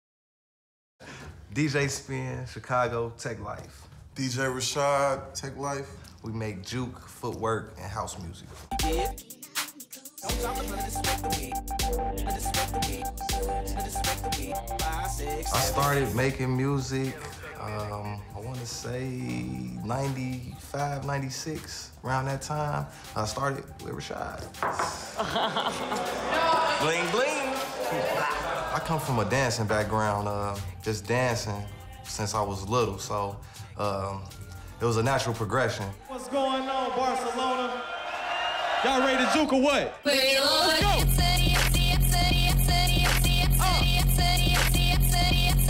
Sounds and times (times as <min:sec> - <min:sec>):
Music: 0:08.2 - 0:37.9, 0:39.5 - 0:45.6.